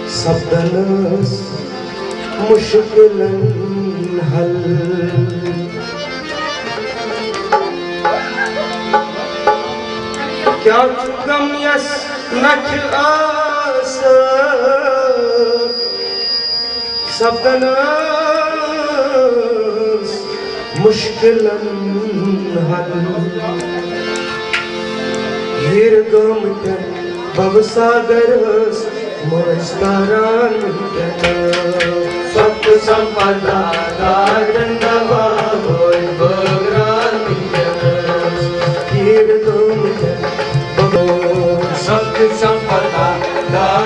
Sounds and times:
Music of Asia: 0.0s - 43.8s
Tabla: 0.0s - 43.8s
Singing: 25.6s - 43.8s.

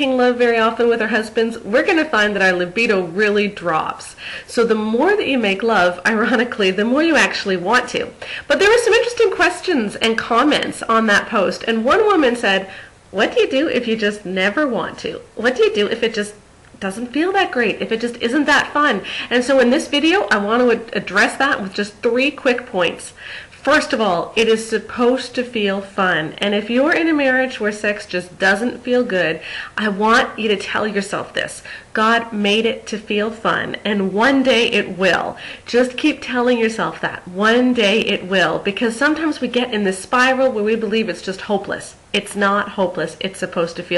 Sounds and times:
Speech: 0.0s - 43.9s.

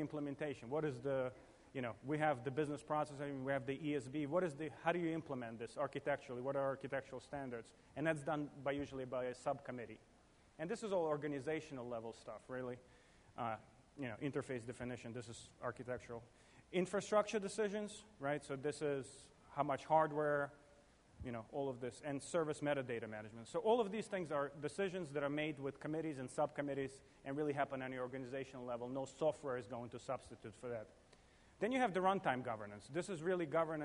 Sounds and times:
Male speech, man speaking: 0.0s - 10.0s, 10.6s - 20.6s, 21.2s - 31.0s, 31.6s - 33.8s.

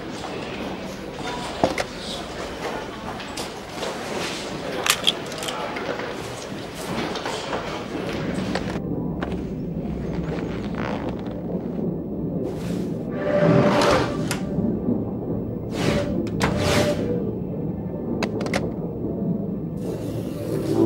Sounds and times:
Speech: 0.0s - 8.8s.

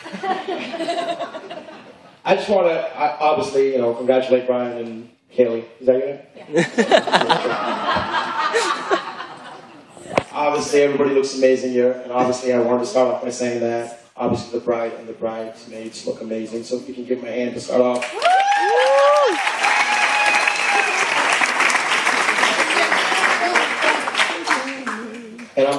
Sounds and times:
Male speech, man speaking: 2.2s - 6.3s, 10.2s - 18.0s, 25.6s - 25.7s
Narration, monologue: 2.2s - 6.4s, 10.2s - 18.1s.

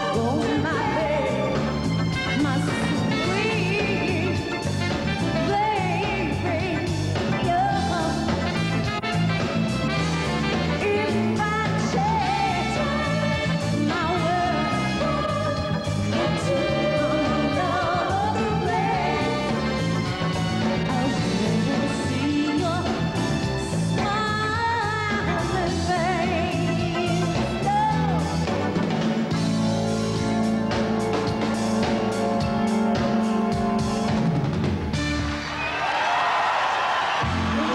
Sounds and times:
Pop music: 0.0s - 35.5s, 37.2s - 37.7s.

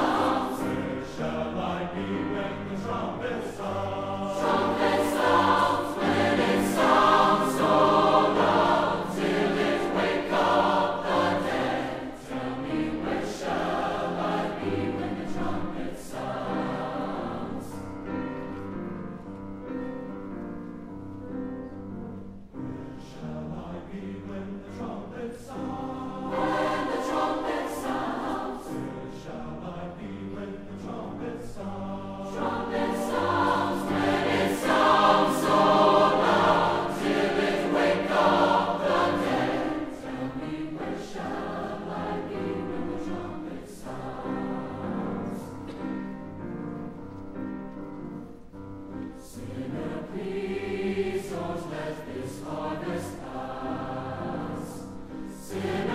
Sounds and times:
Music: 0.0s - 55.9s.

